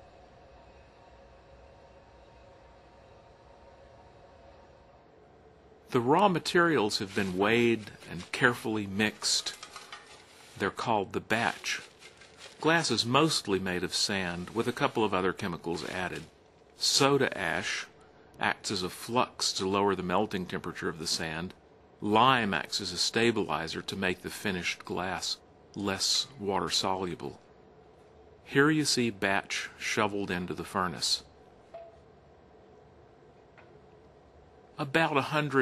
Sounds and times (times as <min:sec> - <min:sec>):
Speech: 0:05.9 - 0:09.6, 0:10.6 - 0:11.9, 0:12.6 - 0:27.4, 0:28.5 - 0:31.3, 0:34.8 - 0:35.6.